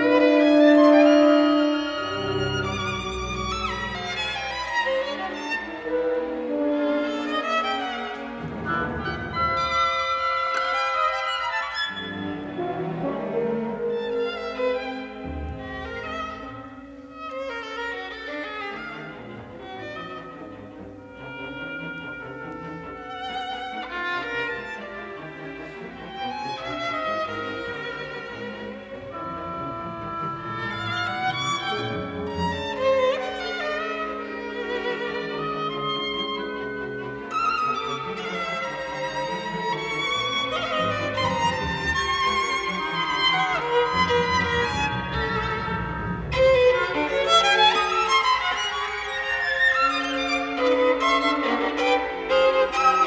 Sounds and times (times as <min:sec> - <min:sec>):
Violin, fiddle: 0:00.0 - 0:53.0.